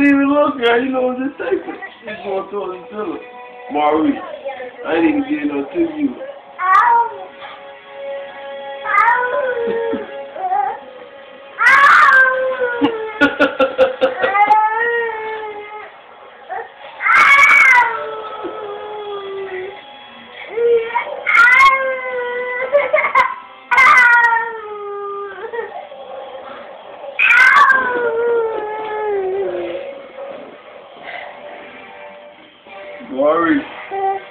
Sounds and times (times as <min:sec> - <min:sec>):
Music: 0:00.0 - 0:34.3
Baby cry, infant cry: 0:08.9 - 0:10.8, 0:11.6 - 0:15.9, 0:20.5 - 0:25.8, 0:27.2 - 0:29.8.